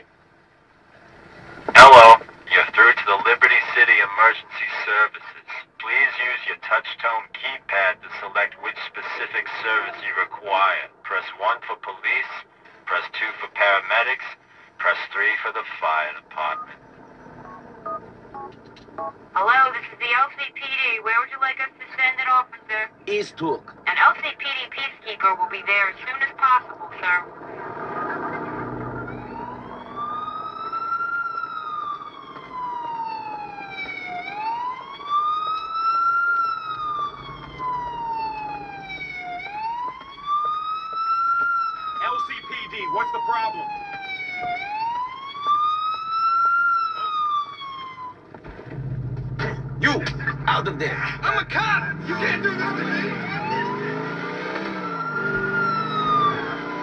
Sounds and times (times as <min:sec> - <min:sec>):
Police car (siren): 0:01.7 - 0:05.0, 0:14.8 - 0:20.2, 0:25.1 - 0:56.8
Speech: 0:01.7 - 0:16.8, 0:19.4 - 0:27.3, 0:42.0 - 0:43.7, 0:49.4 - 0:53.2
Car passing by: 0:27.3 - 0:30.7, 0:50.3 - 0:56.8.